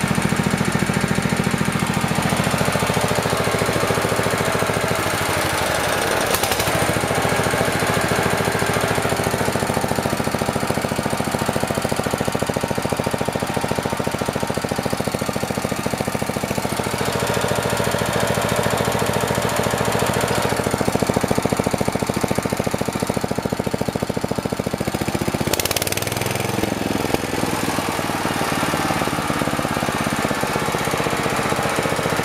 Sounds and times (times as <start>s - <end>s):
Idling: 0.0s - 32.2s
Medium engine (mid frequency): 0.0s - 32.2s.